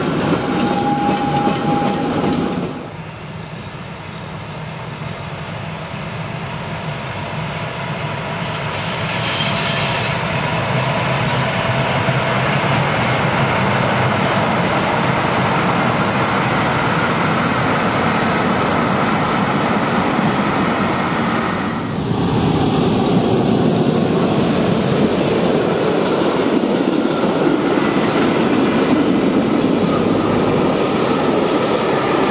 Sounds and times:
Railroad car, train wagon: 0.0s - 32.3s
Train: 0.0s - 32.3s.

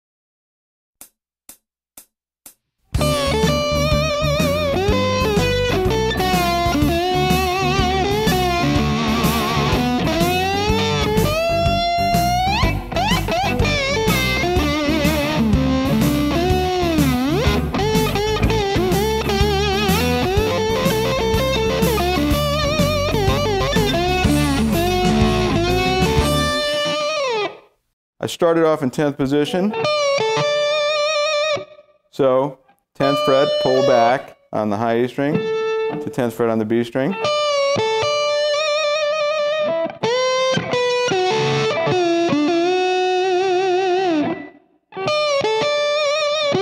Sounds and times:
Tapping (guitar technique): 1.0s - 27.6s, 29.7s - 31.8s, 33.0s - 34.4s, 35.2s - 36.3s, 37.1s - 46.6s.

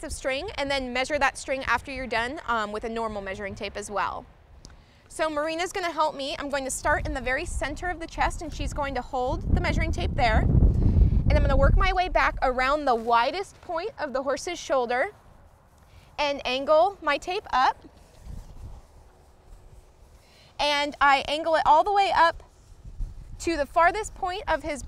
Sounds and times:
Speech: 0.0s - 4.2s, 5.1s - 10.4s, 11.3s - 15.1s, 16.2s - 17.8s, 20.6s - 22.4s, 23.4s - 24.8s.

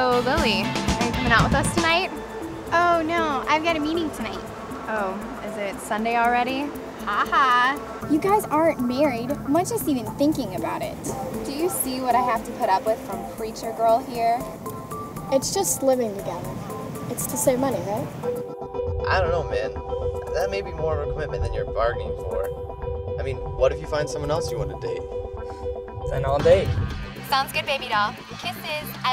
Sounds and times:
Music: 0.0s - 29.1s
Speech: 19.1s - 19.7s, 20.4s - 22.4s.

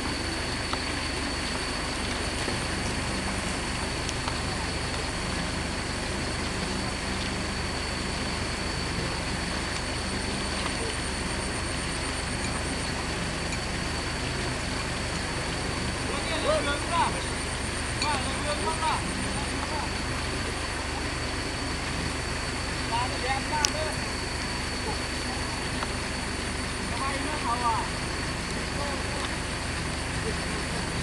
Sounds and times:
Speech: 16.1s - 17.3s, 18.0s - 20.0s, 22.9s - 24.0s, 26.9s - 28.0s, 28.7s - 29.5s.

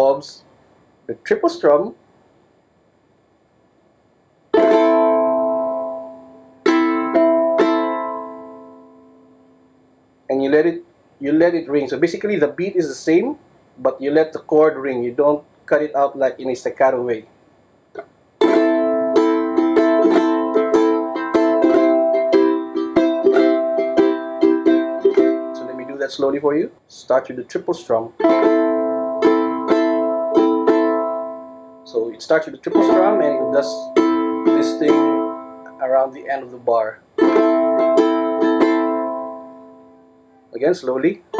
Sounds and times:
Speech: 0.0s - 0.5s, 1.1s - 2.0s, 10.3s - 17.3s, 25.6s - 28.2s, 31.9s - 35.1s, 35.7s - 37.0s, 40.5s - 41.3s
Inside, small room: 0.0s - 41.3s
Ukulele: 4.5s - 9.5s, 18.0s - 26.3s, 28.2s - 31.9s, 32.6s - 36.0s, 37.2s - 40.5s
Guitar: 4.6s - 9.9s, 18.0s - 26.5s, 28.1s - 36.6s, 37.2s - 41.3s.

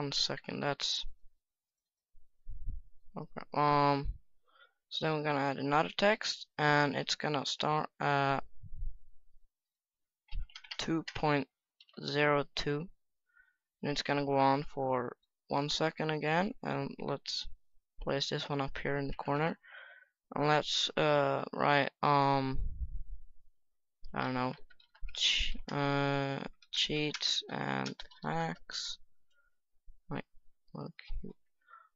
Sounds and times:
Speech: 0.0s - 1.1s, 3.2s - 4.2s, 4.9s - 8.5s, 10.7s - 12.9s, 13.8s - 19.6s, 20.3s - 22.7s, 24.1s - 29.0s, 30.1s - 31.4s.

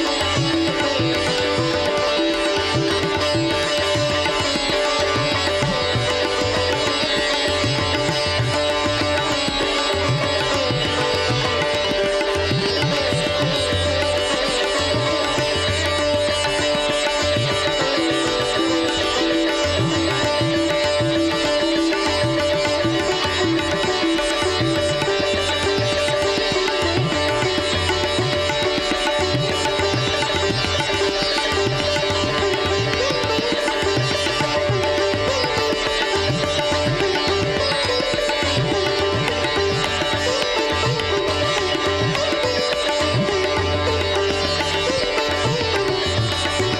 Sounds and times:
Sitar: 0.0s - 46.7s.

